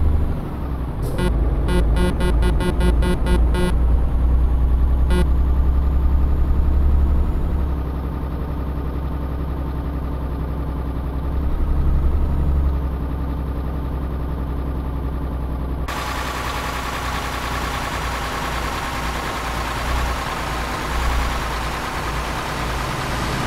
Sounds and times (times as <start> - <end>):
Vehicle: 0.0 - 23.4.